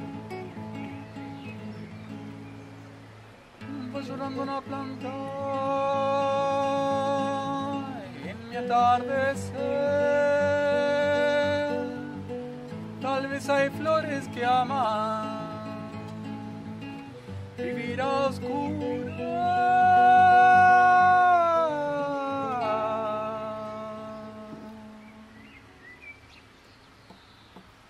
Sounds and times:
Music: 0.0s - 25.8s
Boat, Water vehicle: 18.5s - 25.9s.

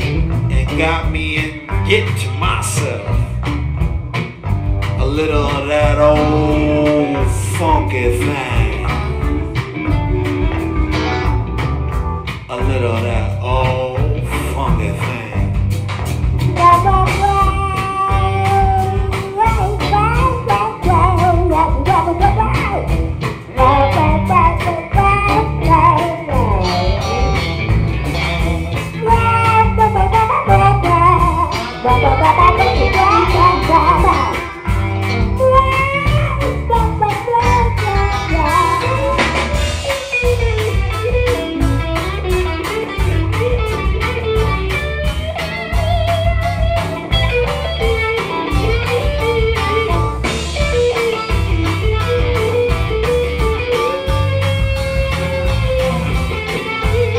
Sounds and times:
Musical instrument: 0.0s - 13.9s, 16.4s - 57.1s
Blues: 0.0s - 57.1s
Rock music: 0.0s - 57.1s.

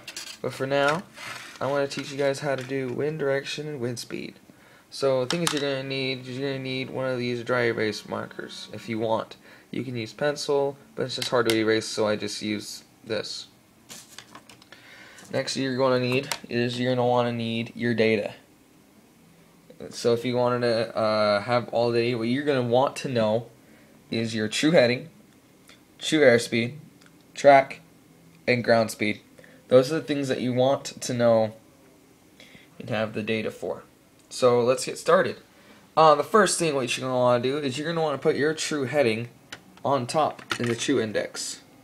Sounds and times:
Speech: 0.4s - 13.6s, 15.3s - 18.5s, 19.7s - 23.5s, 24.1s - 25.2s, 26.0s - 27.8s, 28.4s - 31.6s, 32.8s - 35.4s, 36.0s - 41.7s.

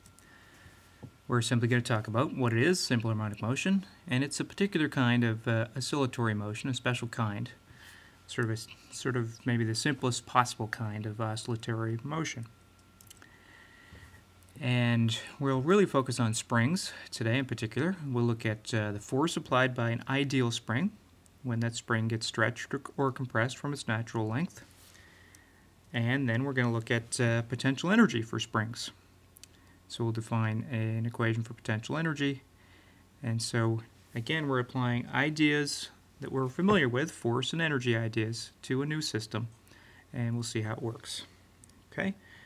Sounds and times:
Speech: 1.3s - 7.6s, 8.3s - 12.6s, 14.6s - 24.7s, 25.9s - 29.0s, 29.9s - 32.5s, 33.2s - 42.2s.

